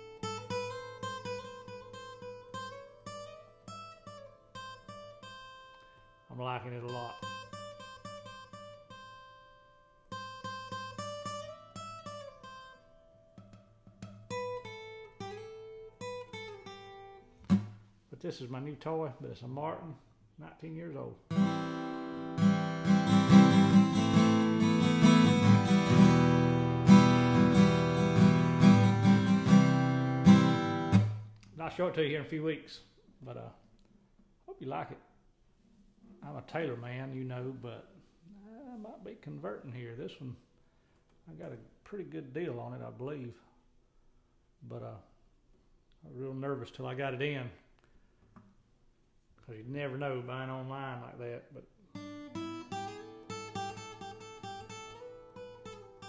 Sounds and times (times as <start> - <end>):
Electronic tuner: 0.0 - 6.3, 6.9 - 17.9, 21.3 - 31.5, 51.9 - 56.0
Guitar: 0.0 - 43.5, 49.3 - 56.0
Speech: 6.3 - 7.3, 18.1 - 21.2, 31.6 - 33.6, 34.5 - 35.1, 36.2 - 40.4, 41.3 - 43.5, 44.6 - 45.1, 46.0 - 47.6, 49.4 - 51.7.